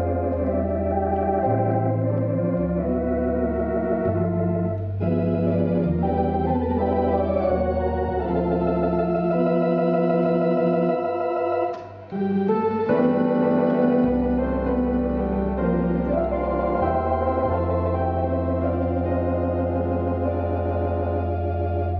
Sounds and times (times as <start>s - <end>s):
Electronic organ: 0.0s - 21.9s
Hammond organ: 0.0s - 21.9s.